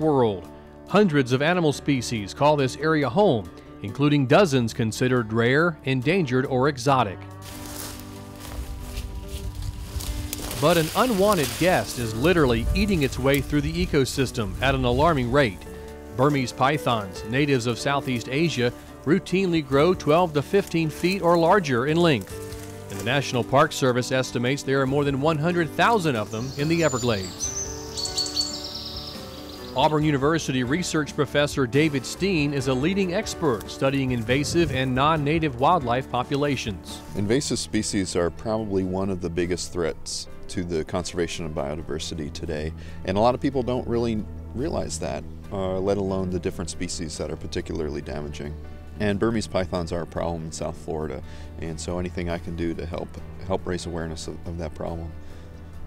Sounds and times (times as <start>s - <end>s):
Speech: 0.0s - 7.2s, 10.5s - 22.3s, 22.9s - 27.4s, 29.8s - 55.1s
Music: 0.0s - 55.8s
Outside, rural or natural: 0.0s - 55.8s.